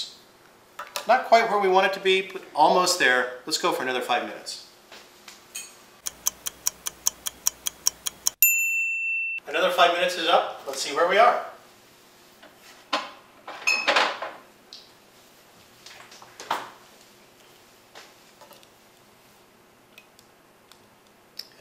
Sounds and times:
Speech: 1.0s - 4.7s, 9.4s - 11.6s.

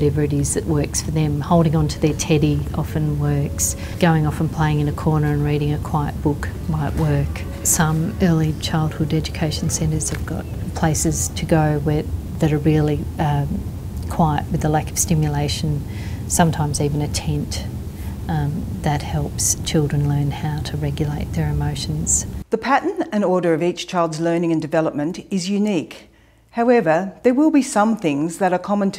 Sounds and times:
Speech: 0.0s - 17.7s, 18.3s - 28.9s.

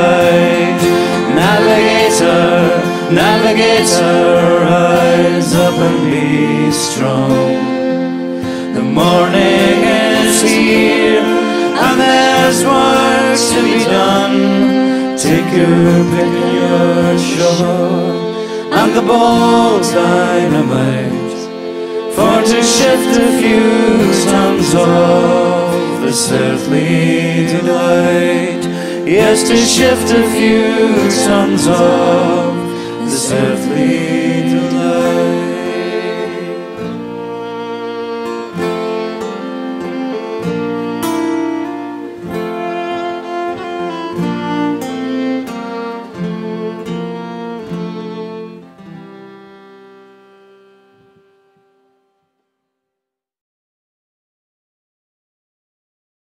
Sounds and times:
Saxophone: 0.0s - 51.9s.

